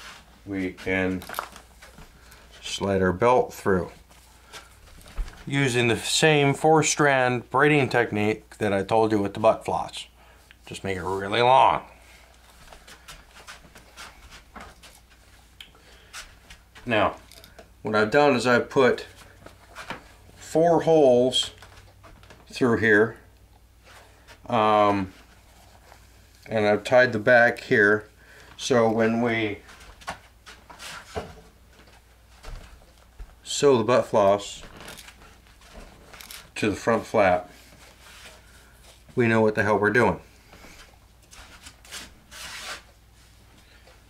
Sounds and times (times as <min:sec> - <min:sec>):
Speech: 0:00.4 - 0:01.3, 0:02.6 - 0:04.0, 0:05.5 - 0:11.9, 0:16.8 - 0:17.2, 0:17.8 - 0:19.2, 0:20.4 - 0:21.6, 0:22.5 - 0:23.3, 0:24.5 - 0:25.2, 0:26.5 - 0:29.7, 0:33.4 - 0:34.7, 0:36.6 - 0:37.6, 0:39.2 - 0:40.3.